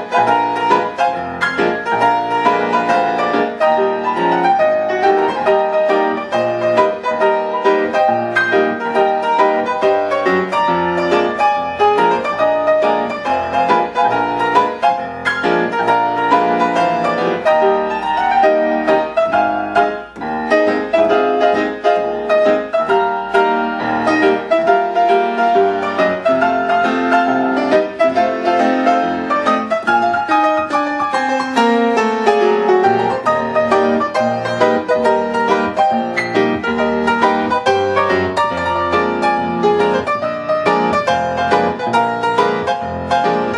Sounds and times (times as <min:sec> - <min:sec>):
Music: 0:00.0 - 0:43.5.